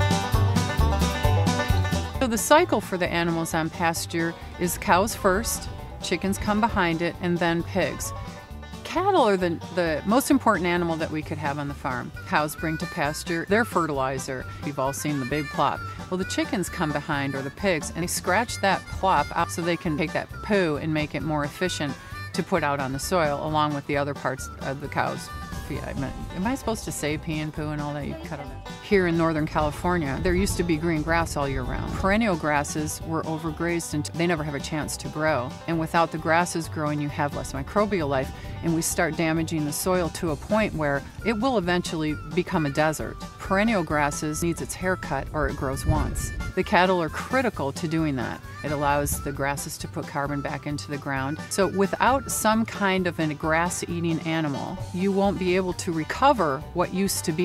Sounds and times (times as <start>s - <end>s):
Music: 0.0s - 57.4s
Speech: 2.2s - 8.1s, 8.9s - 57.4s.